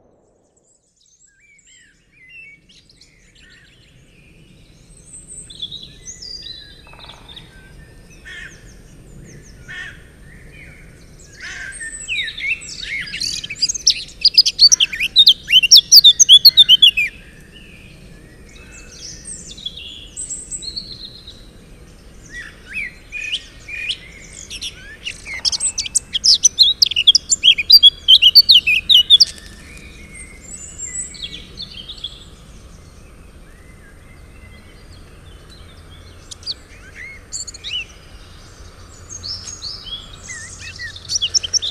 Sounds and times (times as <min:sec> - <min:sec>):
Bird: 0:00.0 - 0:41.7
Environmental noise: 0:00.0 - 0:41.7.